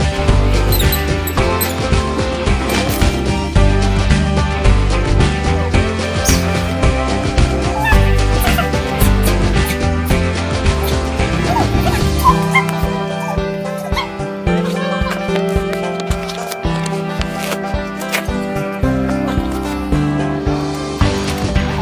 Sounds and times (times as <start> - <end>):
Music: 0.0 - 21.8
Whimper (dog): 7.7 - 9.4, 11.4 - 15.3.